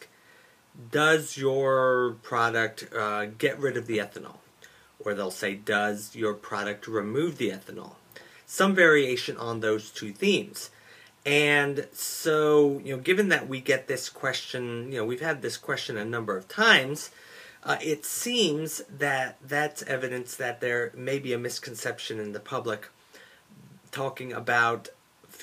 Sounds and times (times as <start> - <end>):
Speech: 0.8 - 4.4, 5.0 - 10.7, 11.3 - 23.0, 23.6 - 25.4.